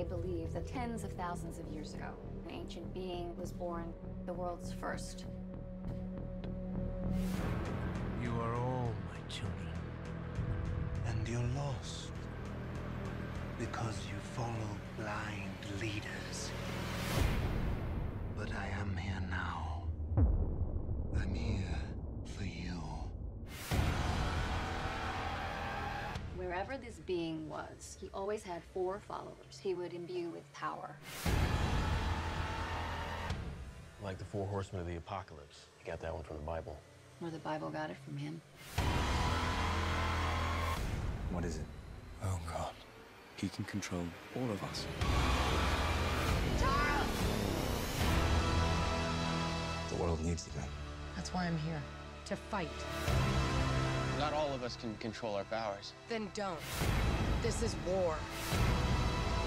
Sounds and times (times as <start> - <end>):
Music: 0.0 - 42.8, 43.4 - 59.4.